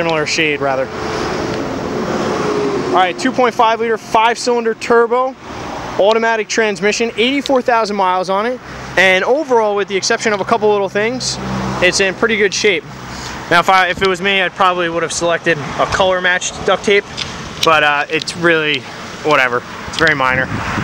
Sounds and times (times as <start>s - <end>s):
Speech: 0.0s - 0.9s, 3.0s - 5.4s, 6.0s - 12.9s, 13.5s - 20.5s
Car: 0.0s - 20.8s.